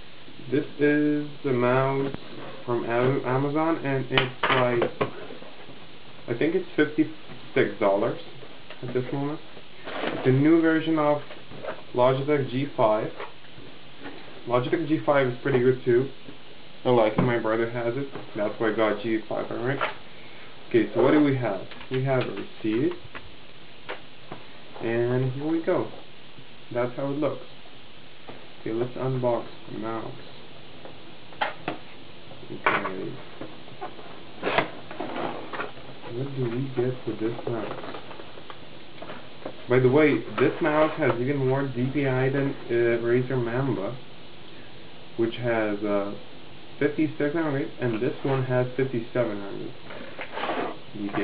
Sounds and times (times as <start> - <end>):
Speech: 0.4 - 5.3, 6.3 - 9.5, 10.2 - 13.2, 14.4 - 16.2, 16.8 - 20.0, 20.7 - 23.1, 24.8 - 26.0, 26.7 - 27.5, 28.6 - 30.4, 32.4 - 33.2, 36.0 - 37.9, 39.7 - 44.0, 45.2 - 51.2.